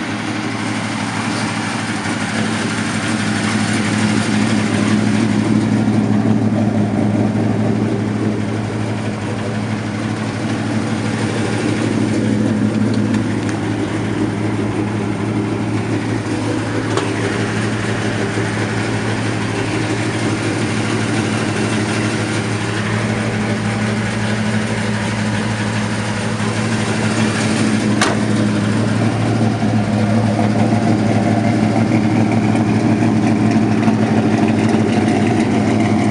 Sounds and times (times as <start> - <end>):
Car: 0.0 - 36.1.